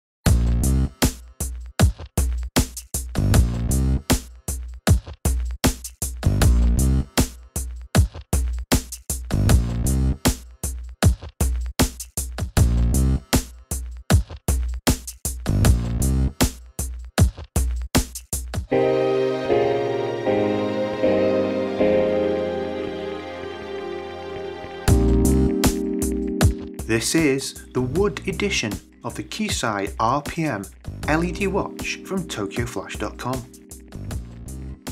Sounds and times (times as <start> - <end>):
Music: 0.2 - 34.9
Speech: 26.9 - 33.5.